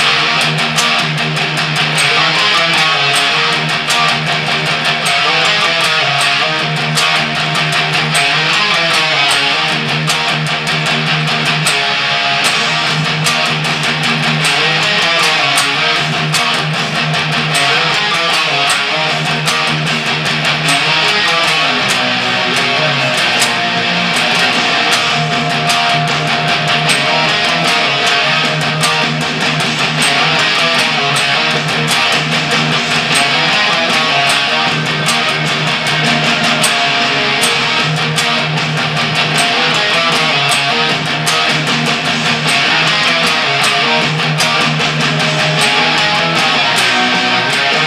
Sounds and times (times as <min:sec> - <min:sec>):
Strum: 0:00.0 - 0:47.8.